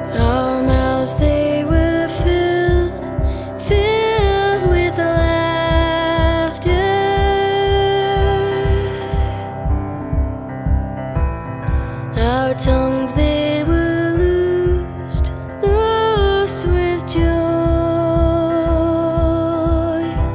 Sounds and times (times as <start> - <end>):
Music: 0.0 - 20.3.